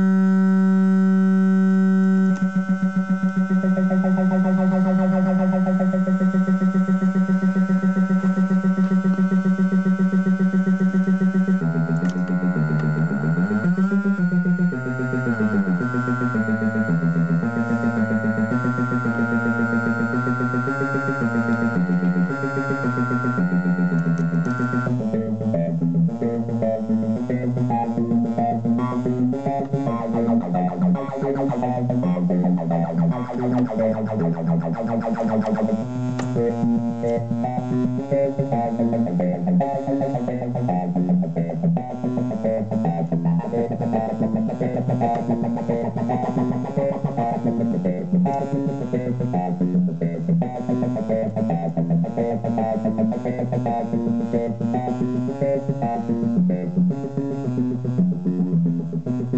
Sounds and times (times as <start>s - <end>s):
Sound effect: 0.0s - 25.1s, 28.3s - 35.8s
Music: 0.0s - 59.3s.